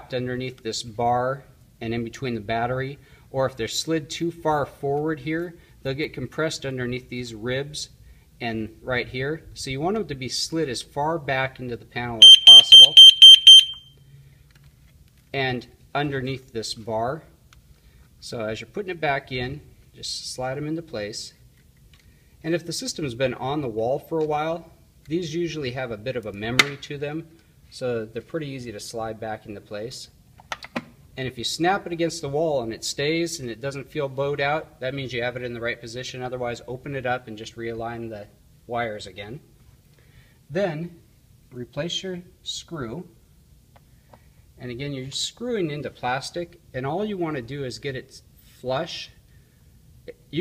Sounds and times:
Speech: 0.0 - 13.0, 15.3 - 17.4, 18.2 - 21.4, 22.4 - 30.2, 31.2 - 39.5, 40.5 - 43.2, 44.6 - 49.2, 50.1 - 50.4
Inside, small room: 0.0 - 50.4
Smoke detector, smoke alarm: 12.2 - 14.0.

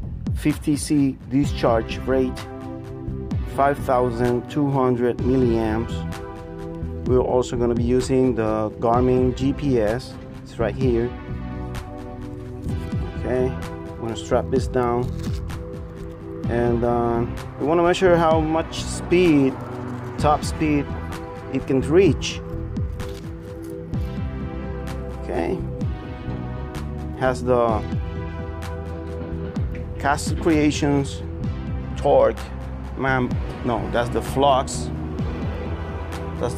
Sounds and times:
Music: 0.0 - 36.5
Speech: 0.4 - 2.4, 3.5 - 6.0, 7.1 - 11.2, 13.2 - 15.1, 16.5 - 19.6, 20.2 - 20.9, 21.5 - 22.4, 25.2 - 25.7, 27.2 - 27.9, 30.0 - 31.2, 32.0 - 34.9.

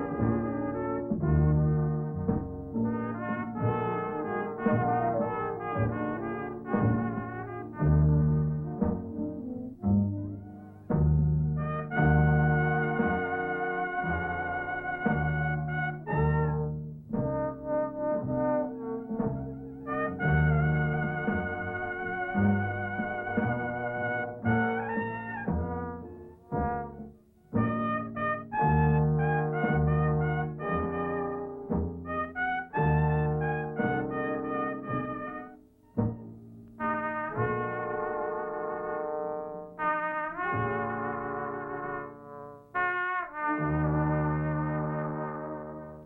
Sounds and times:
Music: 0.0 - 46.0.

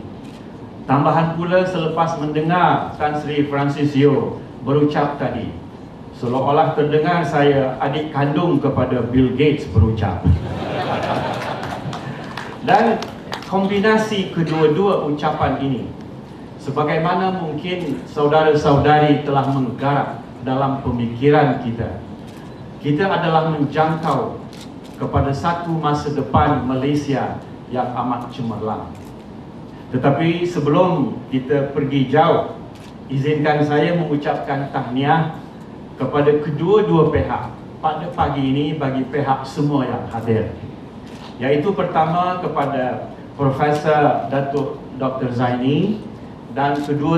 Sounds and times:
Narration, monologue: 0.0 - 47.1
Male speech, man speaking: 0.9 - 5.6, 6.2 - 10.4, 12.6 - 15.9, 16.6 - 22.0, 22.8 - 24.4, 25.0 - 28.9, 29.9 - 32.5, 33.1 - 35.3, 36.0 - 40.6, 41.4 - 47.1.

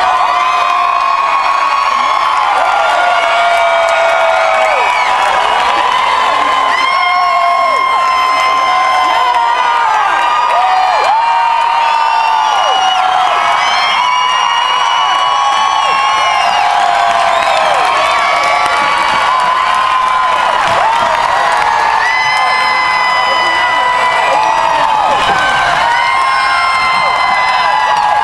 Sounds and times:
Speech: 22.4 - 25.4.

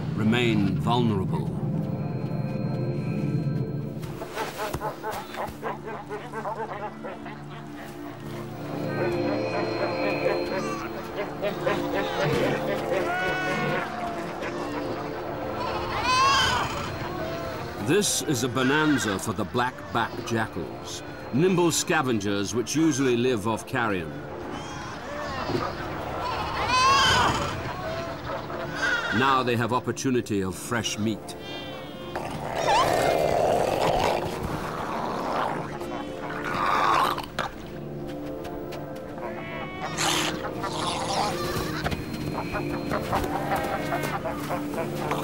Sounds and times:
Music: 0.0 - 45.2
Wild animals: 31.4 - 37.5, 39.2 - 45.2.

